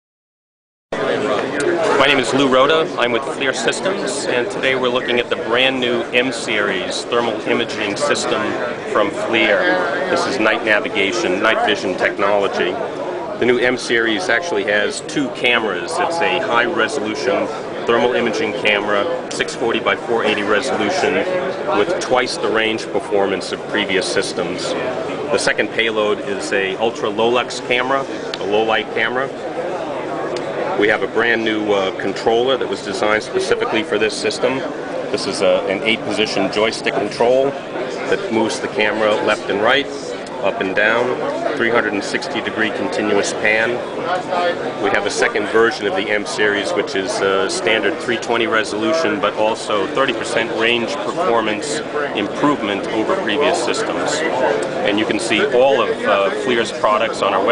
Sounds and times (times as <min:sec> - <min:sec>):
Speech: 0:01.0 - 0:57.5.